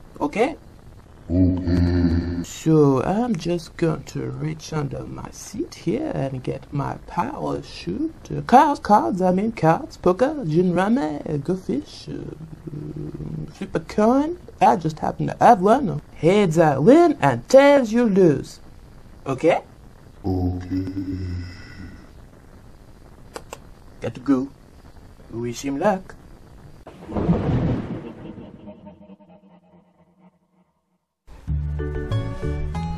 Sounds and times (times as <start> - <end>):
Speech: 0.2 - 0.6, 1.3 - 18.6, 19.3 - 19.7, 24.0 - 24.6, 25.3 - 26.2
Music: 31.3 - 32.9.